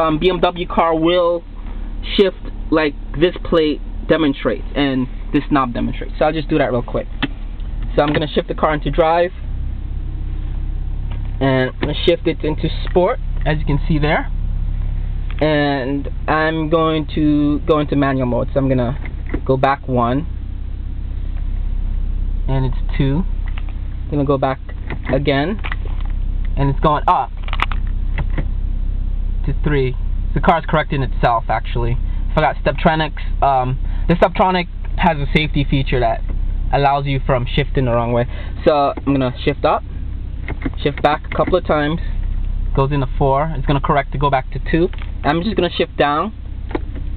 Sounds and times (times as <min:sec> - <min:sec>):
Speech: 0:00.0 - 0:07.1, 0:07.9 - 0:09.4, 0:11.4 - 0:14.3, 0:15.4 - 0:20.3, 0:22.5 - 0:23.3, 0:24.1 - 0:25.6, 0:26.6 - 0:27.4, 0:29.4 - 0:39.8, 0:40.7 - 0:46.4
Car: 0:00.0 - 0:47.1.